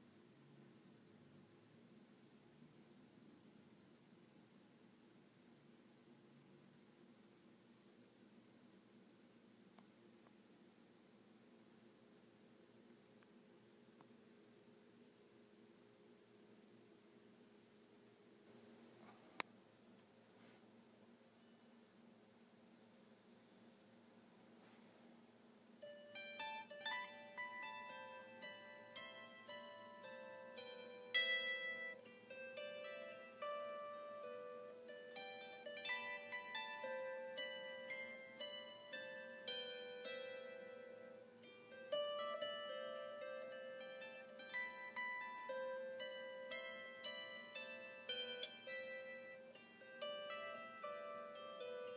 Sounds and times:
Pizzicato: 25.8 - 51.9
Zither: 25.8 - 51.9.

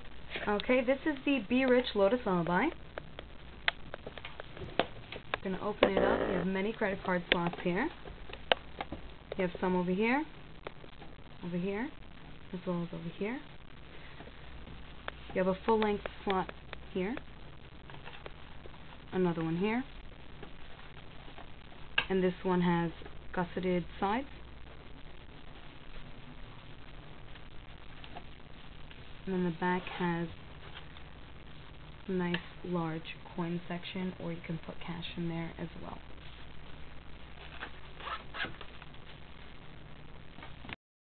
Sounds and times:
Speech: 0.4 - 2.8, 5.4 - 8.0, 9.4 - 10.3, 11.4 - 13.5, 15.3 - 17.2, 19.1 - 19.9, 22.1 - 24.3, 29.3 - 30.4, 32.1 - 36.0.

